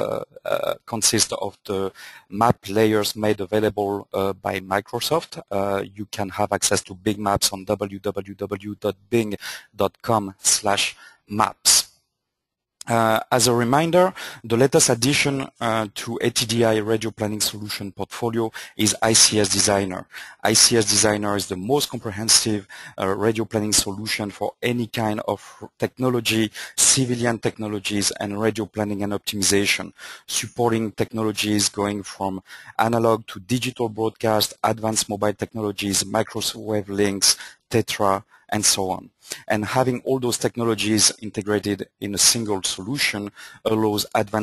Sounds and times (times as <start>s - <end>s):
Speech: 0.0s - 11.9s, 12.8s - 44.4s.